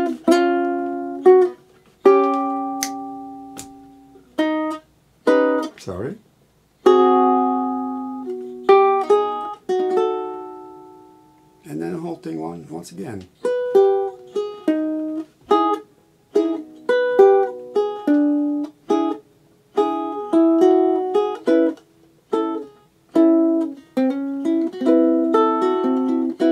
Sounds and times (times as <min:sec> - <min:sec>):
Ukulele: 0:00.0 - 0:05.9, 0:06.8 - 0:12.1, 0:13.2 - 0:26.5
Acoustic guitar: 0:00.0 - 0:06.2, 0:06.8 - 0:26.5.